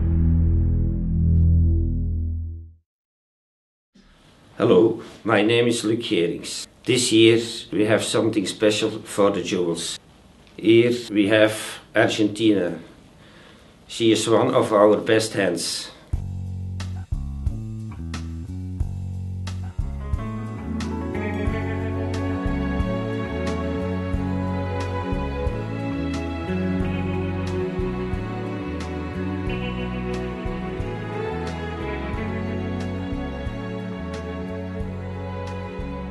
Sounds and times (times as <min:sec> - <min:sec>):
Music: 0:00.0 - 0:02.8, 0:16.1 - 0:36.1.